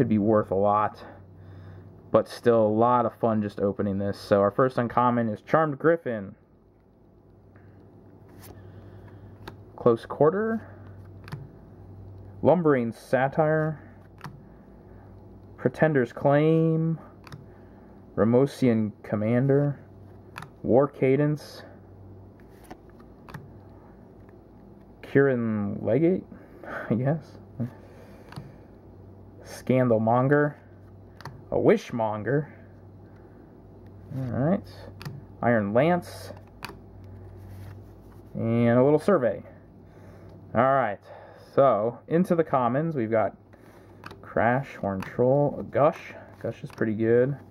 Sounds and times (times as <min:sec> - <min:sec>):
Speech: 0:00.0 - 0:01.2, 0:02.1 - 0:06.4, 0:09.8 - 0:10.7, 0:12.4 - 0:13.8, 0:15.6 - 0:17.0, 0:18.2 - 0:19.8, 0:20.6 - 0:21.8, 0:25.0 - 0:26.3, 0:26.9 - 0:27.4, 0:29.4 - 0:30.6, 0:31.5 - 0:32.6, 0:34.1 - 0:36.4, 0:38.4 - 0:39.6, 0:40.6 - 0:43.4, 0:44.3 - 0:47.5.